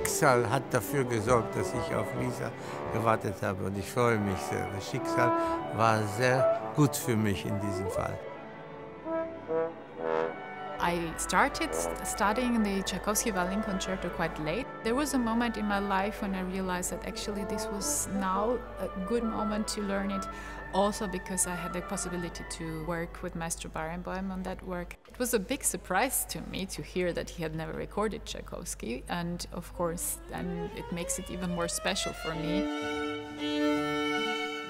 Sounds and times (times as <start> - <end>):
Speech: 0.0 - 8.2, 10.8 - 32.6.